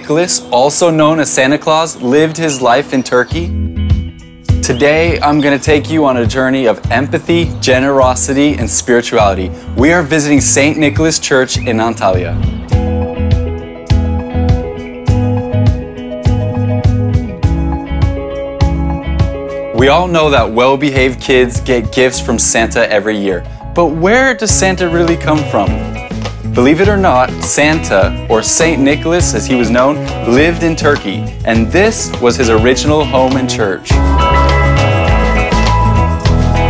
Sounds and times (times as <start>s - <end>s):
Speech: 0.0s - 3.5s, 4.6s - 12.5s, 19.8s - 25.8s, 26.6s - 34.0s
Music: 0.0s - 36.7s.